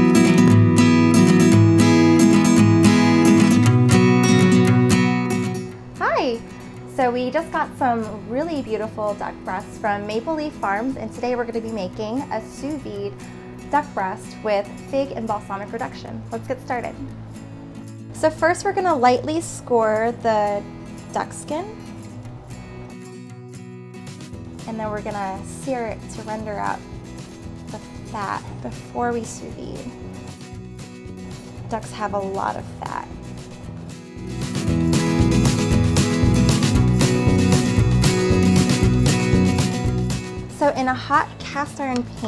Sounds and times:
Music: 0.0s - 42.2s
Speech: 6.0s - 6.4s, 7.0s - 13.1s, 13.8s - 17.1s, 18.2s - 20.6s, 21.2s - 21.8s, 24.7s - 26.8s, 27.7s - 29.9s, 31.7s - 33.1s, 40.5s - 42.2s.

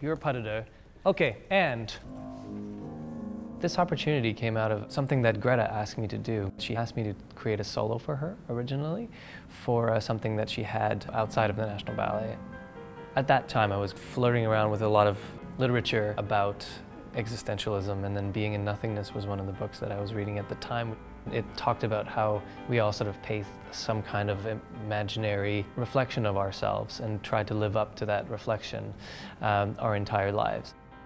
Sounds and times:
Speech: 0.0s - 2.1s, 3.6s - 12.4s, 13.2s - 30.8s
Music: 1.8s - 31.0s.

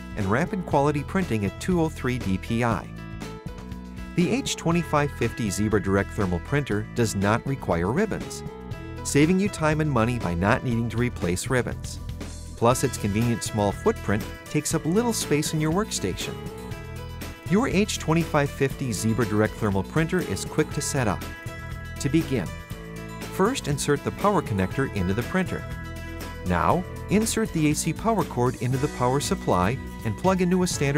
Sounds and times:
Music: 0.0s - 30.9s
Speech: 0.2s - 2.9s, 4.2s - 8.4s, 9.1s - 12.0s, 12.6s - 16.4s, 17.5s - 21.2s, 22.0s - 22.6s, 23.4s - 25.6s, 26.5s - 30.9s.

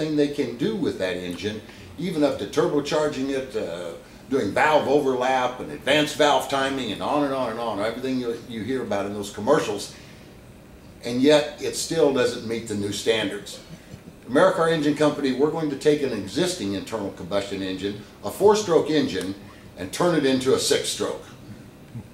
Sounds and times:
Speech: 0.0s - 10.0s, 11.0s - 21.3s.

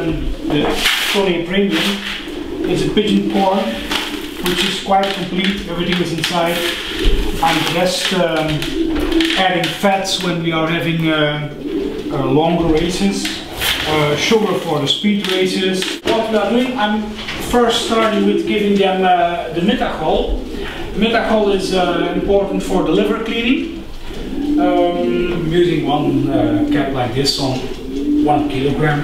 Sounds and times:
Coo: 0.0s - 29.0s.

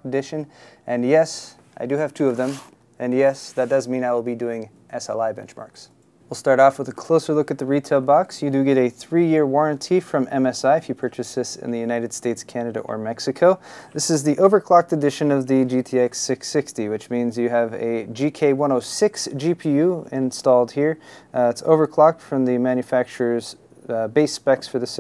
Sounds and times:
Speech: 0.0s - 25.0s.

